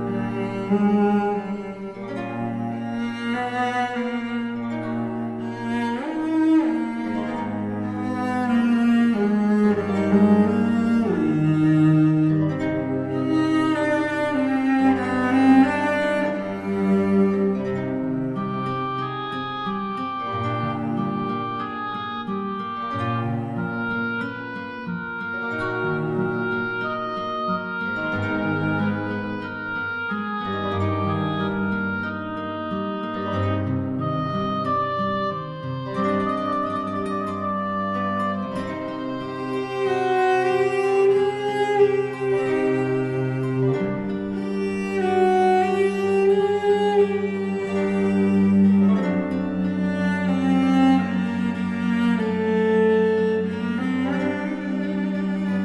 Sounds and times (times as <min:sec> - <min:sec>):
Music: 0:00.0 - 0:55.6.